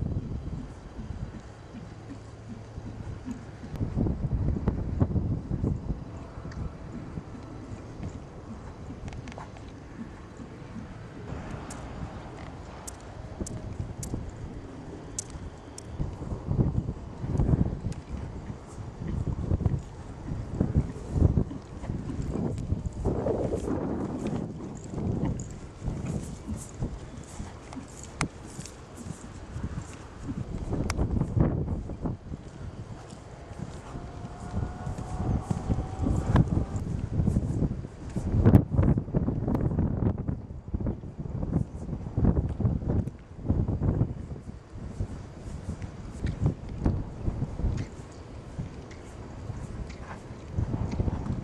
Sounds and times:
Clip-clop: 0.0s - 51.4s.

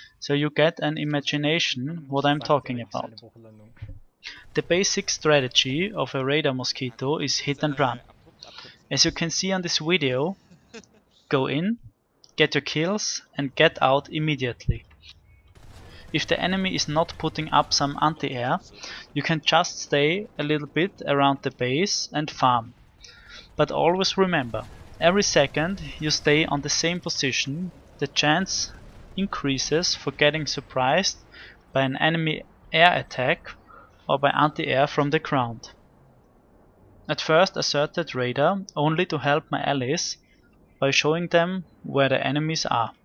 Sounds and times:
Speech: 0.0s - 10.4s, 11.3s - 11.8s, 12.4s - 15.2s, 16.1s - 35.7s, 37.1s - 40.2s, 40.8s - 43.0s.

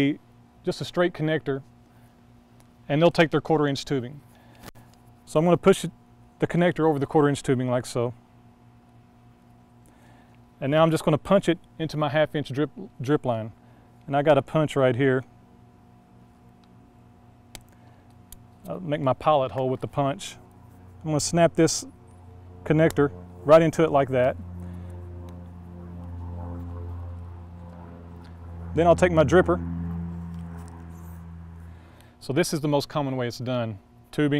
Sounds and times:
Speech: 0.0s - 1.7s, 2.9s - 4.2s, 5.3s - 8.2s, 10.6s - 15.3s, 18.7s - 20.4s, 21.0s - 21.9s, 22.7s - 24.4s, 28.8s - 29.6s, 32.2s - 34.3s.

